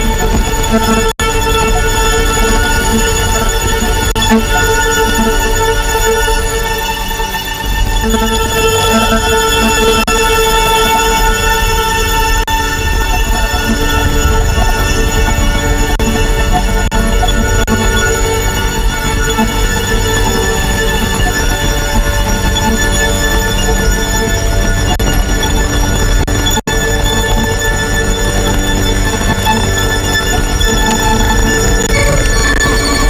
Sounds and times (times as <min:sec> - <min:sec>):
Electronica: 0:00.0 - 0:33.1.